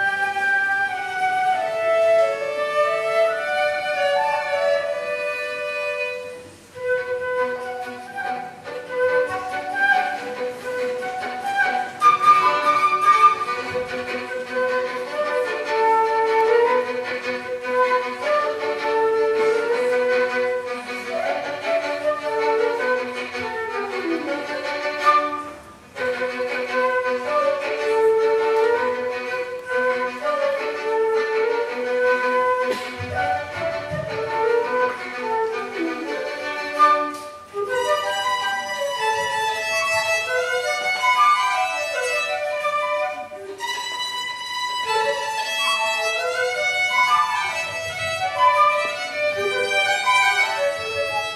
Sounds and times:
Flute: 0.0s - 51.3s
Violin, fiddle: 0.0s - 51.3s.

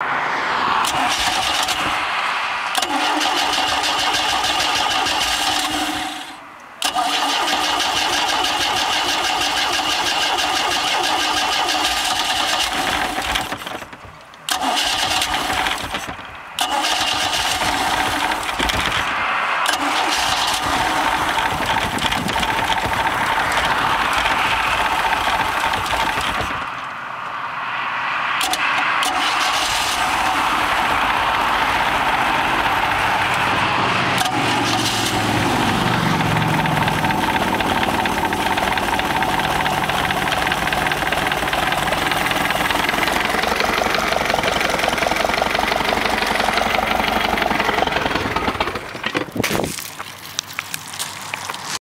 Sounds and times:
Medium engine (mid frequency): 0.0s - 51.8s
Idling: 2.8s - 19.1s, 19.7s - 26.7s, 34.2s - 49.3s.

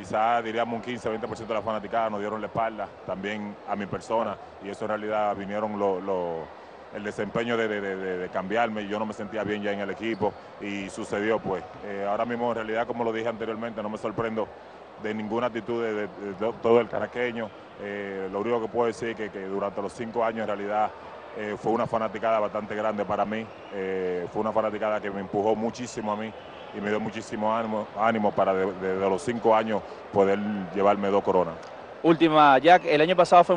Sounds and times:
Speech: 0.0s - 6.4s, 7.0s - 33.5s.

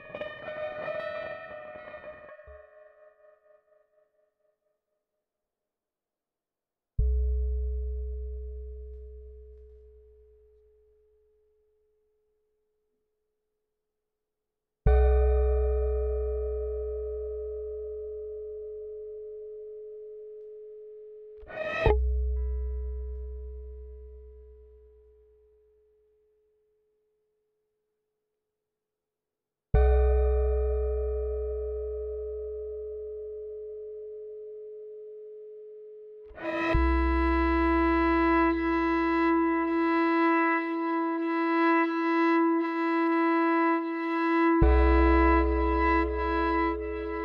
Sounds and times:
Bowed string instrument: 36.4s - 47.2s.

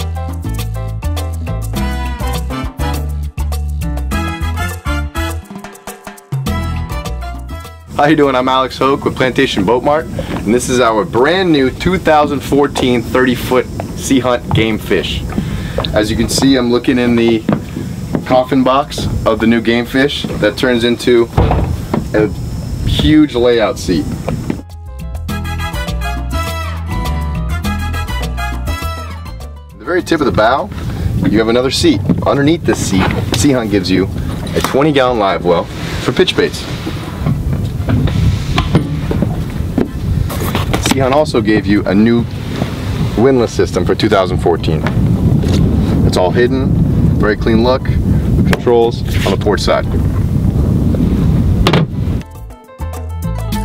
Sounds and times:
Music: 0.0s - 12.8s, 22.8s - 36.6s, 51.7s - 53.6s
Speech: 8.0s - 15.3s, 15.9s - 17.5s, 18.2s - 21.4s, 22.1s - 24.2s, 29.8s - 36.7s, 40.8s - 42.3s, 43.2s - 44.9s, 46.1s - 50.0s.

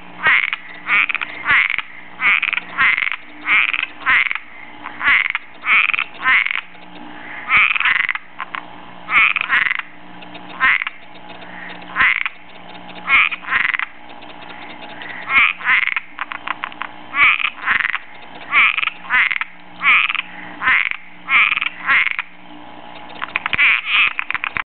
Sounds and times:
Frog: 0.2s - 22.4s, 23.0s - 24.6s.

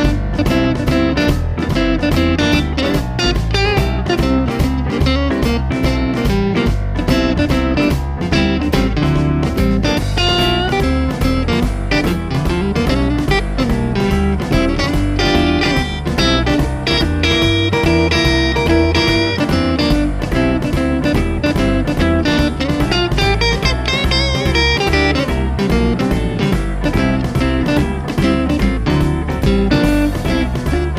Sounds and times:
Guitar: 0.0s - 30.9s.

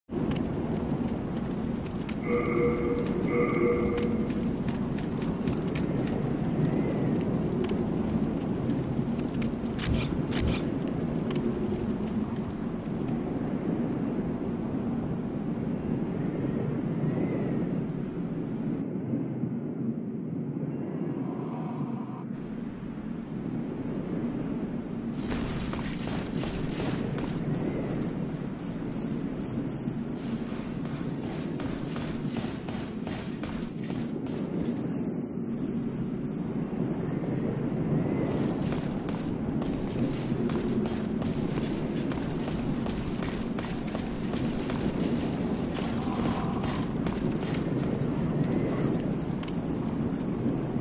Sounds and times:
Outside, urban or manmade: 0.0s - 50.8s.

